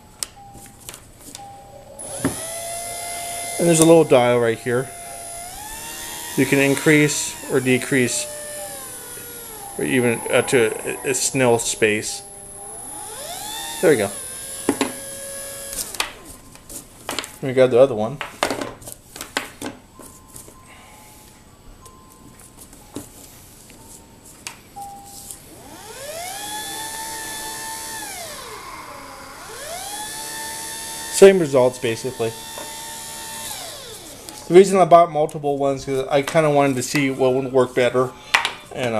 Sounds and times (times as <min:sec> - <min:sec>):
Music: 0:19.4 - 0:25.4.